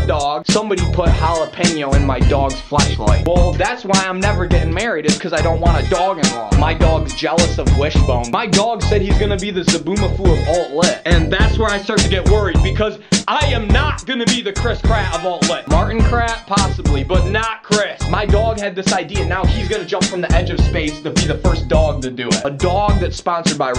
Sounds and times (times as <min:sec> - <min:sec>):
Music: 0:00.0 - 0:23.7
Speech: 0:00.0 - 0:23.7.